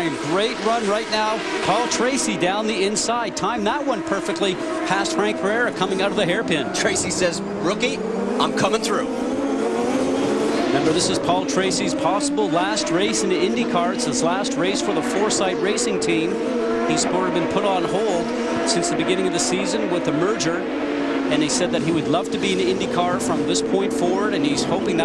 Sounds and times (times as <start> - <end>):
Speech: 0.0 - 9.1, 10.8 - 16.3, 16.9 - 20.6, 21.3 - 25.0
Car: 0.0 - 25.0.